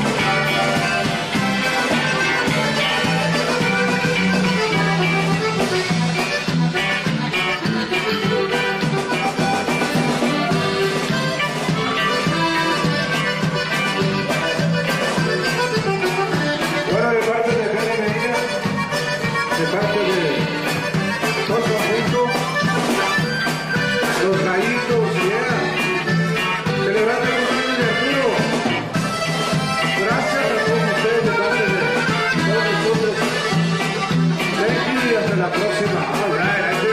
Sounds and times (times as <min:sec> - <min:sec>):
Accordion: 0:00.0 - 0:36.9
Drum kit: 0:00.0 - 0:36.9
Speech: 0:16.8 - 0:18.7, 0:19.5 - 0:20.7, 0:21.3 - 0:22.4, 0:24.0 - 0:25.9, 0:26.7 - 0:28.6, 0:29.9 - 0:33.4, 0:34.4 - 0:36.9.